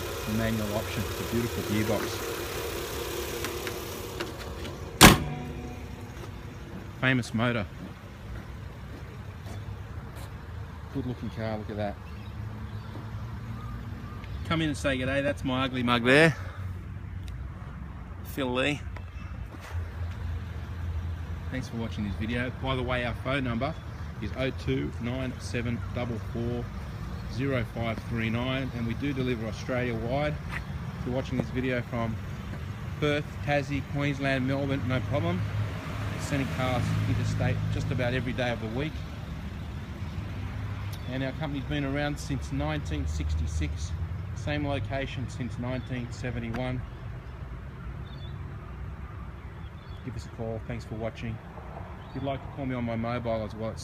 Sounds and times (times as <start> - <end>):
Car: 0.0 - 17.2, 17.8 - 53.8
Outside, urban or manmade: 0.0 - 53.8
Speech: 0.3 - 2.2, 7.0 - 7.7, 10.9 - 12.0, 18.3 - 18.9, 21.5 - 26.7, 27.3 - 30.4, 31.0 - 32.2, 33.0 - 35.4, 36.2 - 39.0, 41.0 - 46.8, 50.0 - 51.4, 52.2 - 53.8.